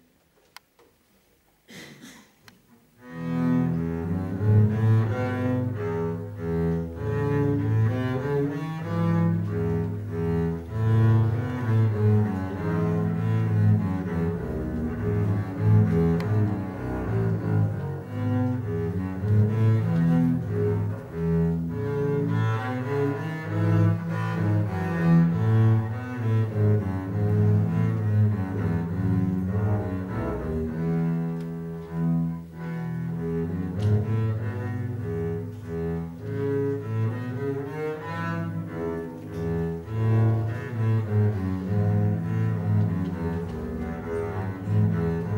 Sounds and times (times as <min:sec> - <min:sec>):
Cello: 0:01.7 - 0:45.3
Double bass: 0:02.8 - 0:45.3.